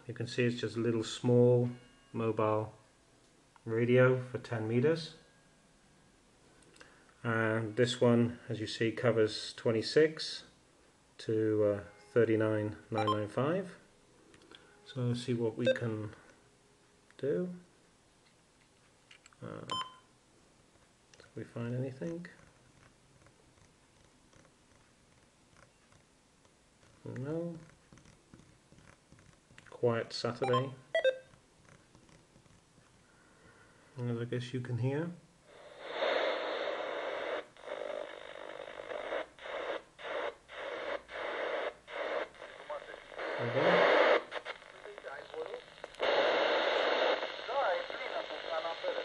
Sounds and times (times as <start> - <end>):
Speech: 0.0 - 2.8, 3.6 - 5.2, 7.2 - 10.6, 11.2 - 13.8, 14.9 - 16.2, 17.2 - 17.7, 19.4 - 19.8, 21.4 - 22.4, 27.0 - 27.7, 29.7 - 30.8, 34.0 - 35.2, 42.7 - 44.0
Radio: 35.6 - 49.0.